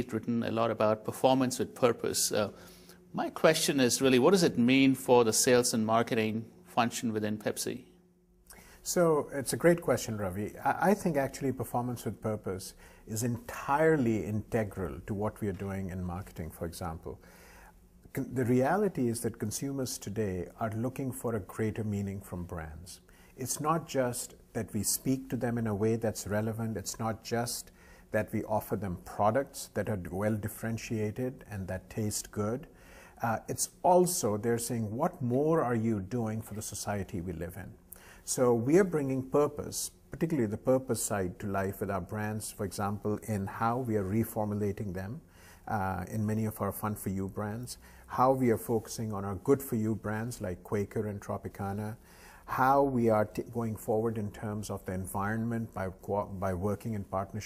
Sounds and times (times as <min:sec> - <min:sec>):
Speech: 0:00.0 - 0:07.9, 0:08.8 - 0:17.2, 0:18.1 - 0:57.4.